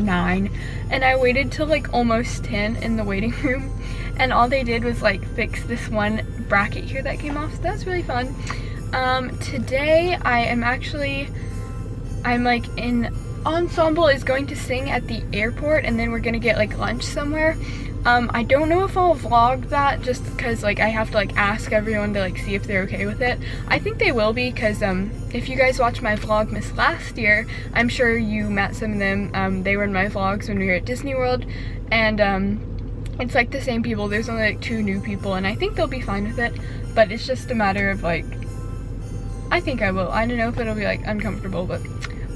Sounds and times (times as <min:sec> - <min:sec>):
Speech: 0:00.0 - 0:11.3, 0:12.3 - 0:38.4, 0:39.5 - 0:42.0
Music: 0:00.0 - 0:42.3.